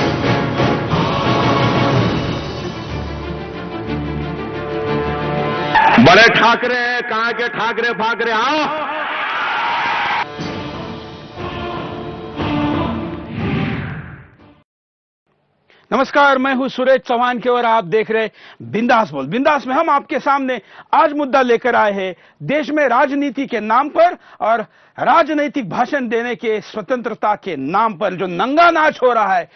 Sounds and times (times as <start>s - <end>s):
Narration, monologue: 5.8s - 8.9s, 15.4s - 29.5s
Male speech, man speaking: 5.8s - 9.0s, 15.9s - 29.5s.